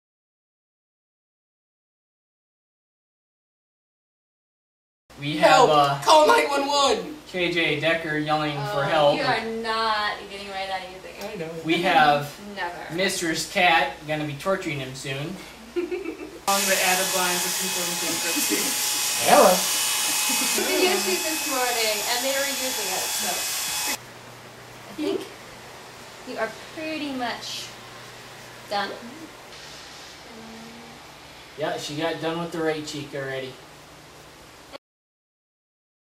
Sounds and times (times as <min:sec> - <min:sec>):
Electric shaver, electric razor: 0:16.5 - 0:24.0.